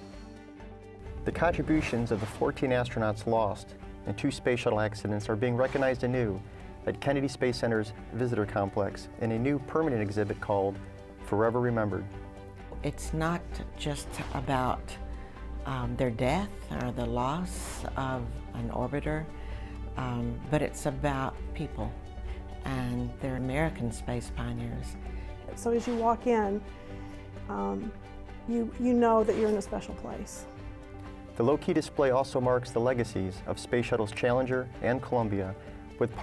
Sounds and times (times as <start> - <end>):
Music: 0.0 - 36.2.